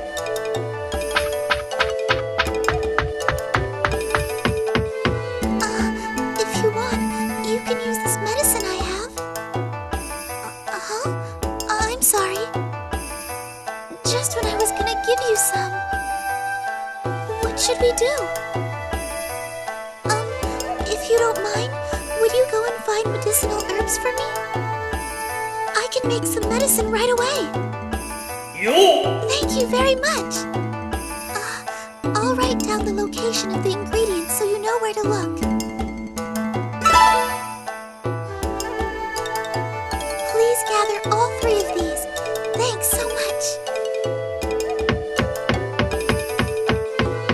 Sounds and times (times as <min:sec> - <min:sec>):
Music: 0:00.0 - 0:47.3
Speech: 0:05.6 - 0:09.2, 0:10.7 - 0:12.5, 0:13.9 - 0:15.8, 0:17.4 - 0:18.3, 0:20.1 - 0:24.3, 0:25.8 - 0:27.6, 0:28.6 - 0:30.5, 0:31.4 - 0:35.4, 0:40.3 - 0:43.6.